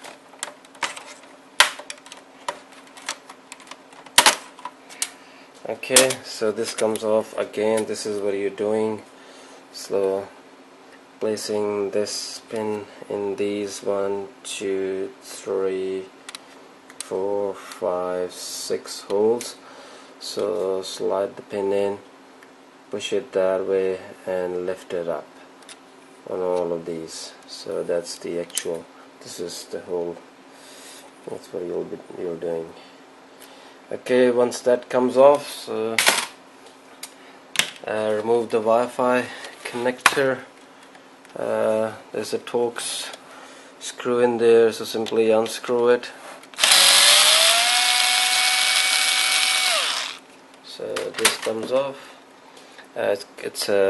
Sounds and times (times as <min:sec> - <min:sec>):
Inside, small room: 0:00.0 - 0:53.9
Speech: 0:05.6 - 0:09.1, 0:09.7 - 0:10.4, 0:11.2 - 0:16.2, 0:17.0 - 0:19.6, 0:20.2 - 0:22.1, 0:22.9 - 0:25.3, 0:26.2 - 0:30.3, 0:31.2 - 0:32.8, 0:33.9 - 0:36.0, 0:37.8 - 0:40.5, 0:41.4 - 0:43.2, 0:43.8 - 0:46.2, 0:50.6 - 0:52.1, 0:52.9 - 0:53.9
Drill: 0:46.6 - 0:50.2.